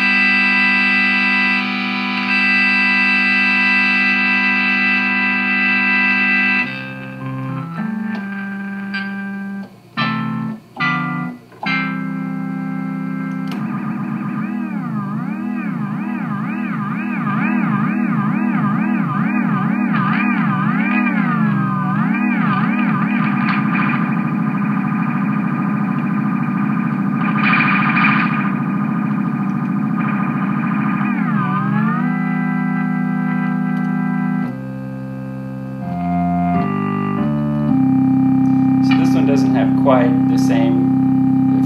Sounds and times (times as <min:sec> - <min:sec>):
Synthesizer: 0:00.0 - 0:41.6.